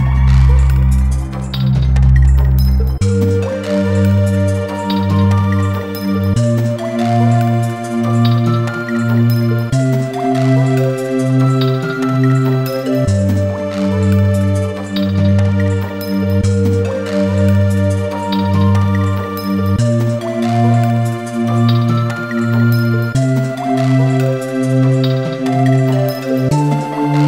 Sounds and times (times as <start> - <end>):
Music: 0.0 - 27.2.